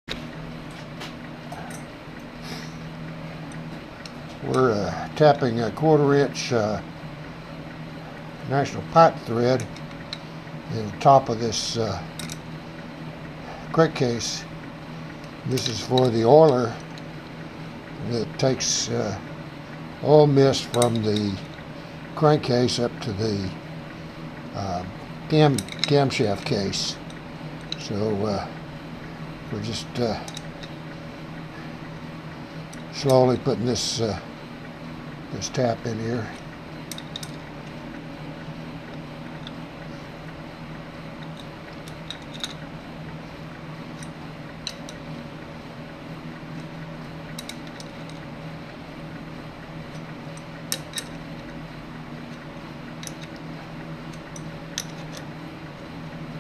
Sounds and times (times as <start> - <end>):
Speech: 4.4 - 6.9, 8.5 - 9.7, 10.7 - 12.1, 13.7 - 14.5, 15.5 - 16.8, 18.0 - 19.3, 20.0 - 21.5, 22.2 - 23.6, 24.6 - 27.0, 27.8 - 28.6, 29.5 - 30.4, 33.0 - 34.3, 35.3 - 36.4.